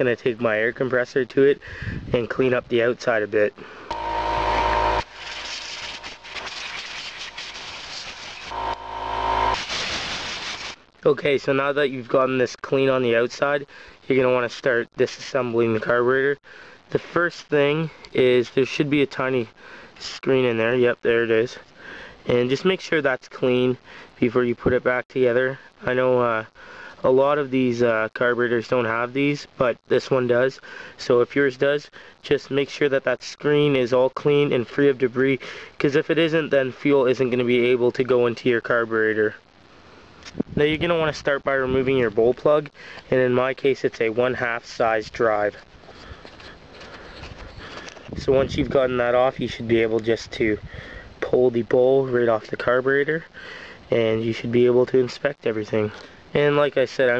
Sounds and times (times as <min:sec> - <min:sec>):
Speech: 0:00.0 - 0:03.6, 0:11.0 - 0:21.6, 0:22.3 - 0:39.4, 0:40.5 - 0:45.6, 0:48.2 - 0:50.6, 0:51.2 - 0:53.3, 0:53.9 - 0:57.1
Power tool: 0:03.9 - 0:10.8.